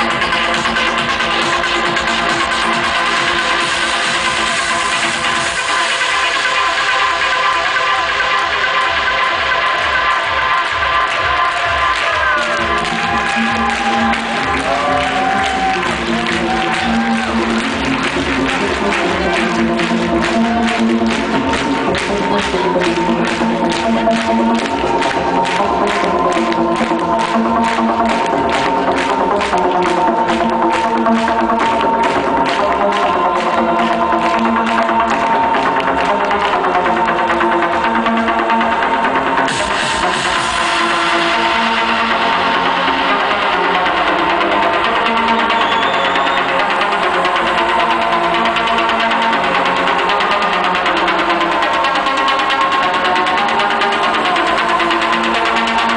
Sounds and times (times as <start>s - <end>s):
Music: 0.0s - 55.9s.